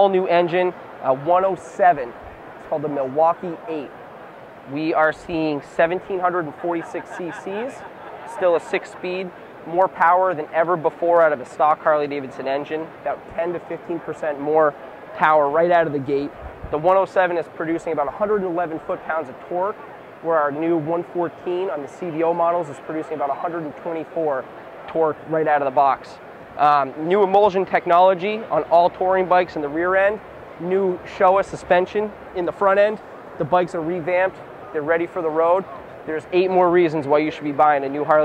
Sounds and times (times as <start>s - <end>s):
Speech: 0.0s - 2.1s, 2.7s - 3.9s, 4.7s - 38.2s.